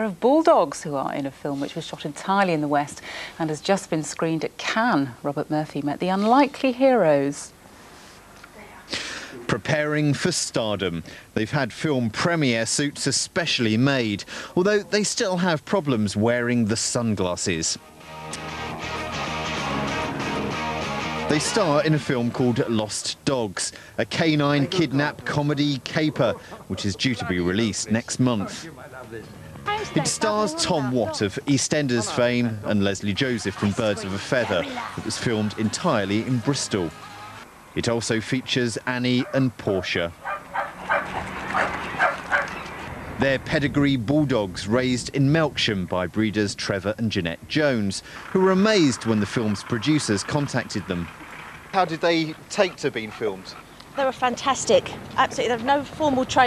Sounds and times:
Speech: 0:08.6 - 0:17.8, 0:21.3 - 0:37.0, 0:37.8 - 0:40.1, 0:43.2 - 0:51.1
Music: 0:17.8 - 0:22.6.

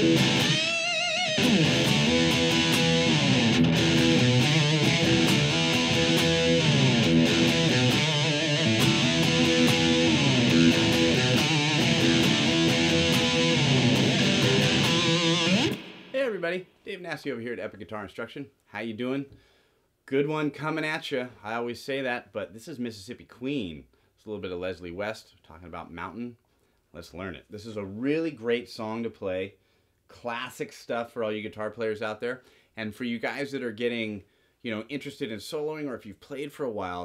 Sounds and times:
Speech: 0:16.1 - 0:19.4, 0:20.1 - 0:37.0.

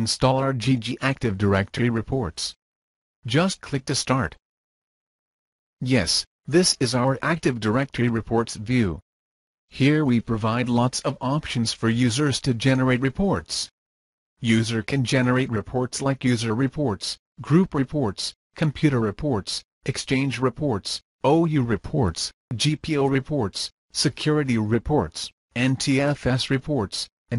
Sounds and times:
Speech: 0:00.0 - 0:02.6, 0:03.3 - 0:04.4, 0:05.8 - 0:09.0, 0:09.7 - 0:13.7, 0:14.4 - 0:27.3.

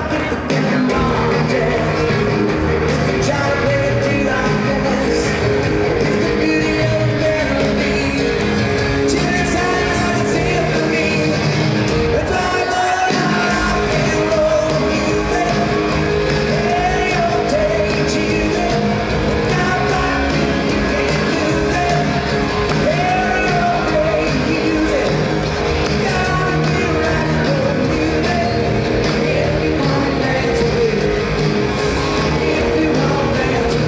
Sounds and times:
Heavy metal: 0:00.0 - 0:33.8
Rock and roll: 0:00.0 - 0:33.8.

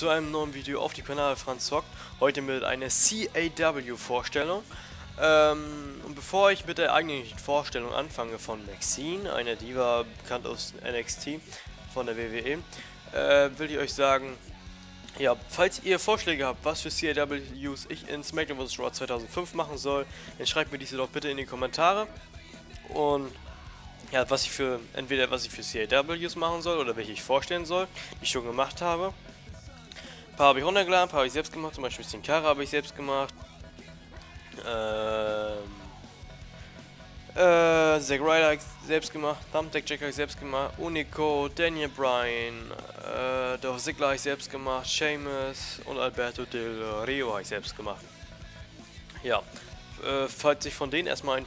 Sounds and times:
Speech: 0:00.0 - 0:14.5, 0:15.1 - 0:29.2, 0:30.4 - 0:33.4, 0:34.5 - 0:36.0, 0:37.4 - 0:48.1, 0:49.1 - 0:51.4
Music: 0:00.0 - 0:51.4.

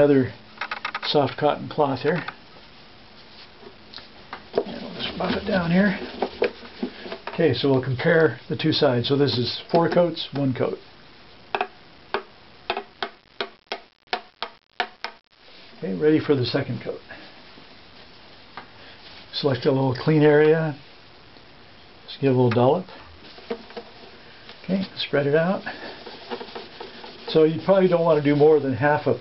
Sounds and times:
Speech: 0:00.0 - 0:00.4, 0:01.0 - 0:02.4, 0:04.6 - 0:06.1, 0:07.3 - 0:10.8, 0:15.8 - 0:17.2, 0:19.3 - 0:20.8, 0:22.1 - 0:23.0, 0:24.6 - 0:25.8, 0:27.3 - 0:29.2
Inside, small room: 0:00.0 - 0:29.2.

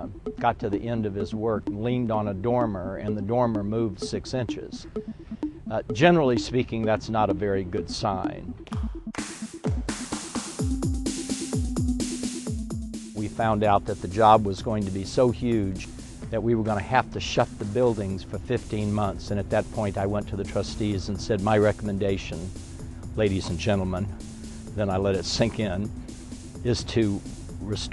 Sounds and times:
Speech: 0:00.0 - 0:04.8, 0:05.7 - 0:08.5, 0:13.2 - 0:22.5, 0:23.2 - 0:24.1, 0:24.8 - 0:25.9, 0:26.6 - 0:27.9
Music: 0:00.0 - 0:27.9.

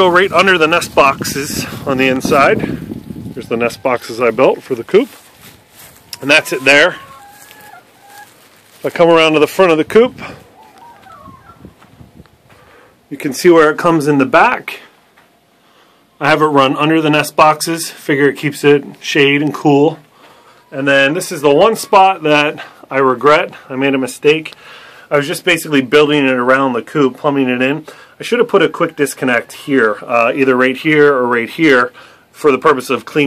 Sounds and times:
Speech: 0:00.0 - 0:02.7, 0:03.4 - 0:05.2, 0:06.2 - 0:07.0, 0:08.8 - 0:10.4, 0:13.1 - 0:14.9, 0:16.2 - 0:20.0, 0:20.7 - 0:33.2
Chicken, rooster: 0:05.4 - 0:08.6, 0:10.3 - 0:11.9, 0:20.3 - 0:22.6, 0:28.5 - 0:30.3.

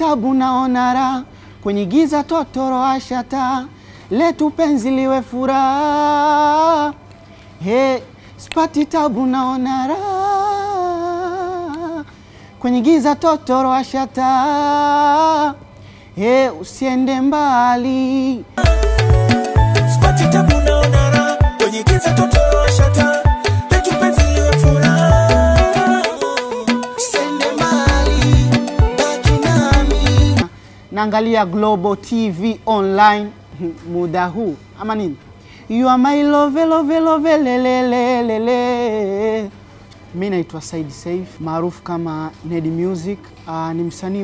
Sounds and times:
Music: 0:18.6 - 0:30.5.

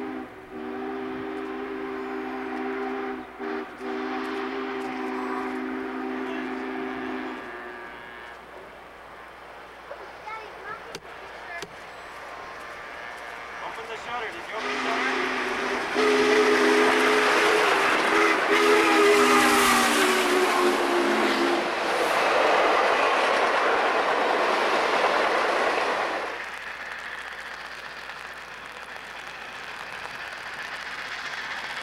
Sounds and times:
Train horn: 0:00.0 - 0:08.4, 0:14.6 - 0:21.7
Train whistle: 0:00.0 - 0:08.4, 0:14.6 - 0:21.8.

